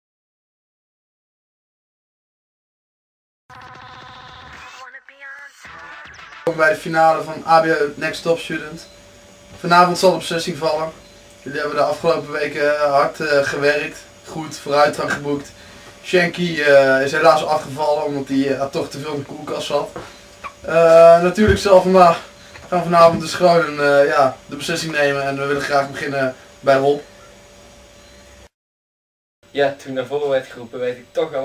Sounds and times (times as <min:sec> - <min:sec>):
Speech: 0:04.6 - 0:08.8, 0:09.6 - 0:20.0, 0:20.7 - 0:27.0, 0:29.5 - 0:31.4.